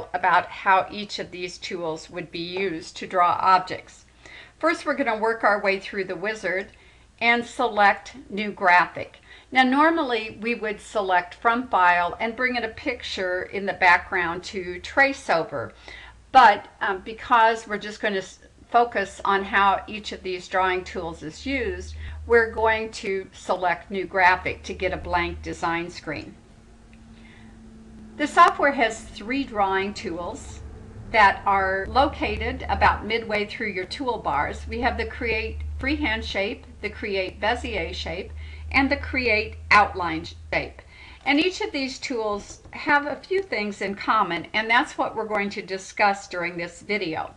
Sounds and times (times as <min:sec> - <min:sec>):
Speech: 0:00.0 - 0:26.4, 0:28.2 - 0:30.6, 0:31.2 - 0:47.3.